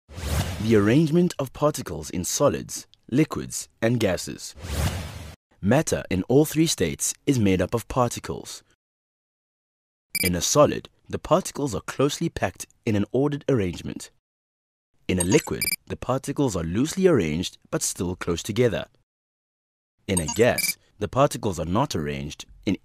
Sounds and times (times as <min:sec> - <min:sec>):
Speech: 0:00.6 - 0:04.5, 0:05.6 - 0:08.7, 0:10.2 - 0:14.2, 0:15.1 - 0:19.0, 0:20.1 - 0:22.8.